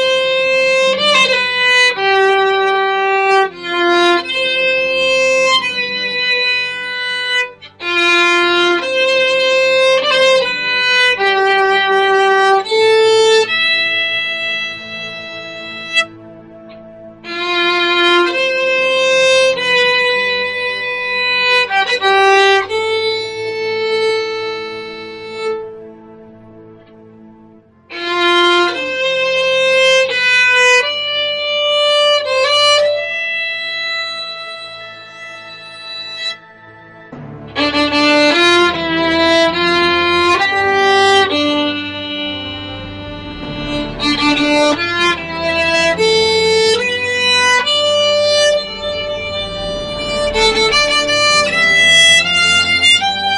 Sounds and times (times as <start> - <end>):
Violin, fiddle: 0.0 - 53.3.